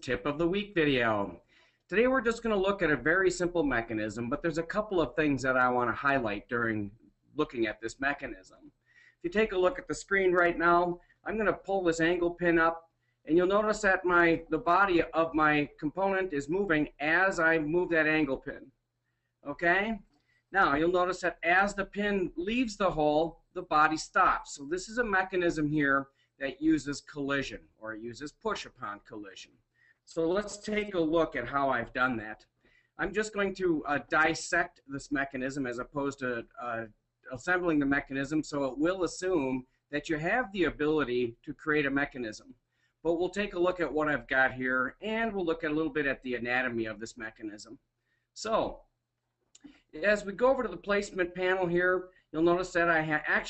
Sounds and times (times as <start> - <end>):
Speech: 0.0 - 8.6, 9.2 - 18.7, 19.4 - 29.5, 30.1 - 47.8, 48.4 - 48.8, 50.0 - 53.4.